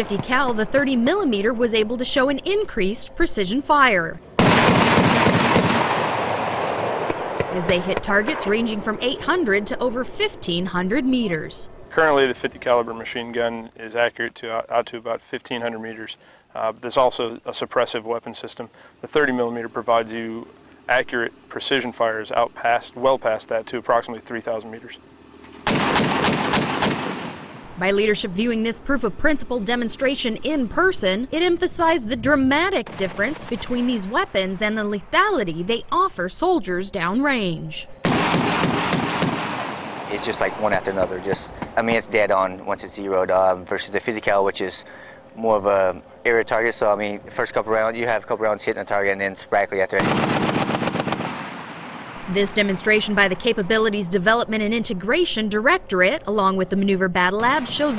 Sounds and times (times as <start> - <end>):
Speech: 0.0 - 4.2, 7.6 - 25.0, 27.8 - 37.9, 40.1 - 50.1, 52.3 - 57.9
Outside, rural or natural: 0.0 - 57.9
Vehicle: 0.0 - 57.9.